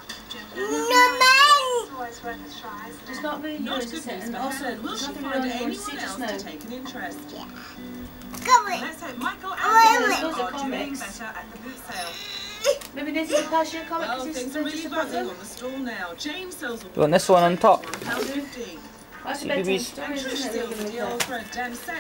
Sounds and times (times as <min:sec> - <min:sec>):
Music: 0:00.0 - 0:11.6, 0:17.8 - 0:22.0.